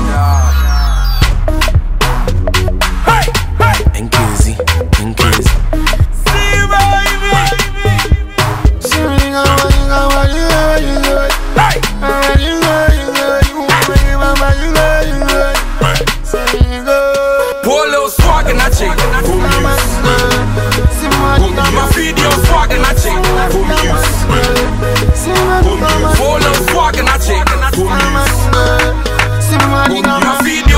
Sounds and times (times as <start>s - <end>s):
Afrobeat: 0.0s - 30.7s.